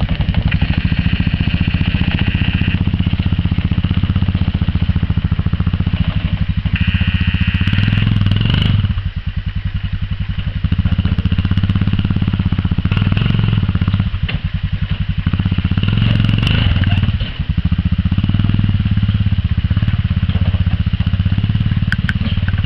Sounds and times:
Vehicle: 0.0s - 22.6s.

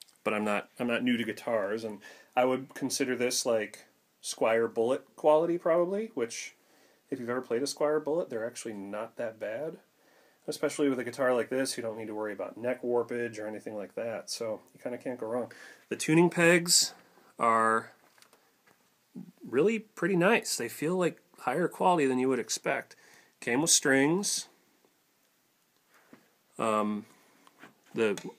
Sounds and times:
Speech: 0.2s - 9.9s, 10.5s - 18.0s, 19.2s - 24.6s, 26.6s - 27.1s, 28.0s - 28.3s.

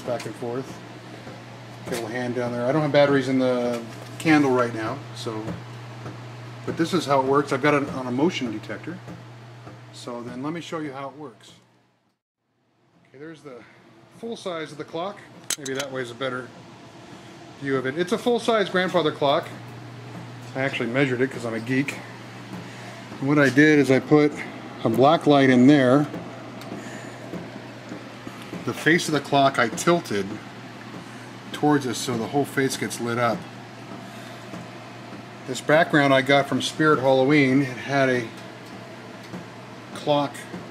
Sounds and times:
Speech: 0.0s - 0.8s, 1.8s - 5.6s, 6.7s - 9.0s, 9.9s - 11.6s, 13.1s - 16.5s, 17.6s - 19.6s, 20.5s - 22.1s, 23.2s - 26.2s, 28.6s - 30.4s, 31.5s - 33.4s, 35.4s - 38.4s, 40.0s - 40.6s.

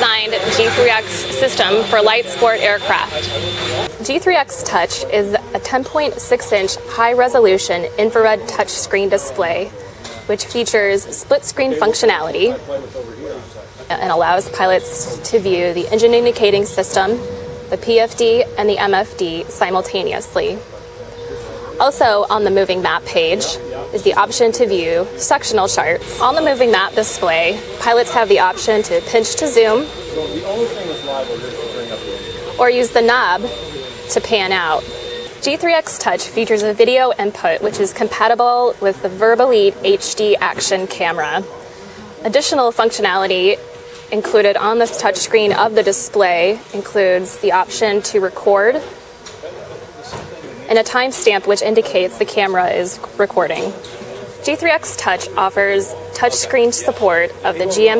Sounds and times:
Speech: 0.0s - 20.6s, 21.3s - 34.8s, 35.4s - 41.5s, 42.2s - 48.9s, 49.5s - 57.9s.

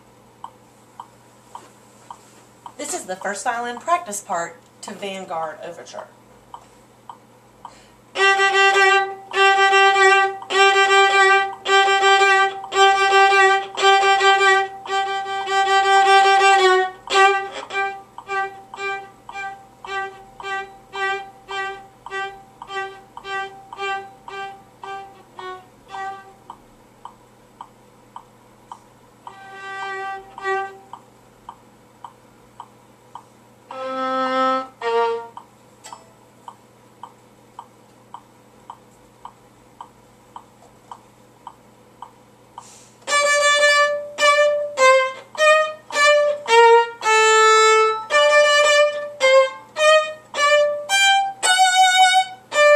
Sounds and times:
Violin, fiddle: 8.2s - 26.4s, 29.3s - 30.9s, 33.7s - 35.4s, 43.1s - 52.7s.

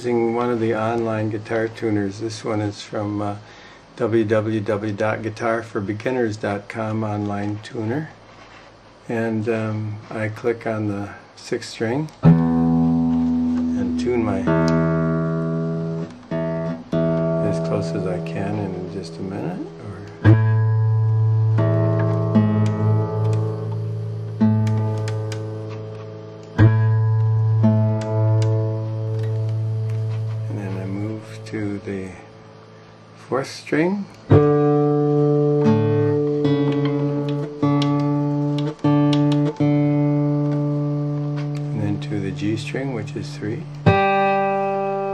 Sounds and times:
Speech: 0.0s - 8.2s, 9.1s - 12.2s, 13.8s - 14.6s, 17.4s - 20.2s, 30.5s - 32.3s, 33.2s - 34.2s, 41.7s - 43.7s
Strum: 12.2s - 33.5s, 34.1s - 45.1s.

